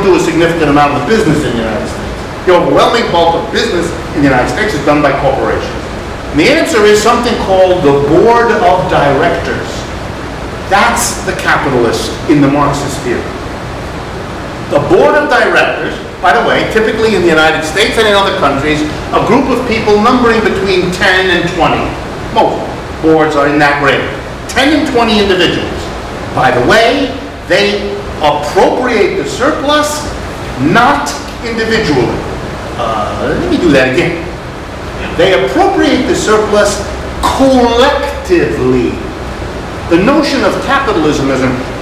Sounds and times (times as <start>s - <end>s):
Speech: 0.0s - 9.9s, 10.7s - 13.3s, 14.7s - 34.3s, 35.0s - 39.1s, 39.9s - 41.7s.